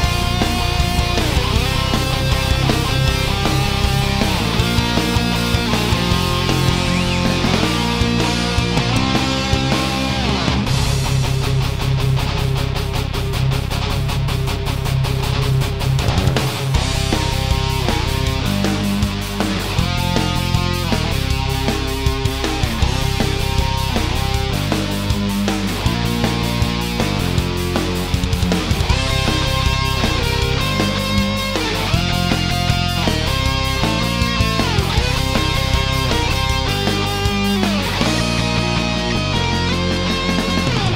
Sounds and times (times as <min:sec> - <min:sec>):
Blues: 0:00.0 - 0:40.9.